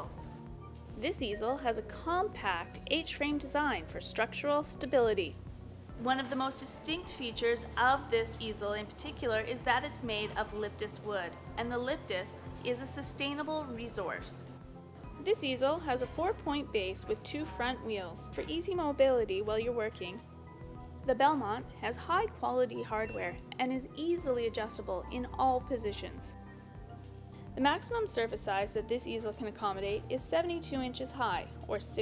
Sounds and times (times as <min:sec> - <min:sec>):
Music: 0:00.0 - 0:32.0
Speech: 0:01.0 - 0:05.4, 0:06.0 - 0:14.4, 0:15.2 - 0:20.2, 0:21.1 - 0:26.4, 0:27.6 - 0:32.0.